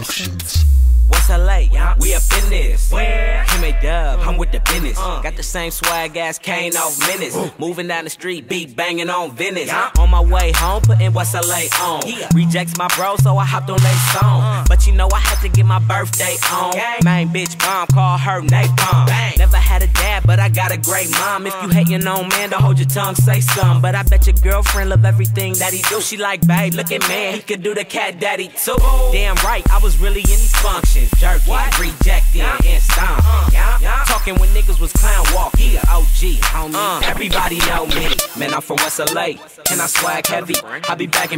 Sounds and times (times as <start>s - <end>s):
Music: 0.0s - 7.4s, 10.0s - 27.8s, 28.8s - 41.3s.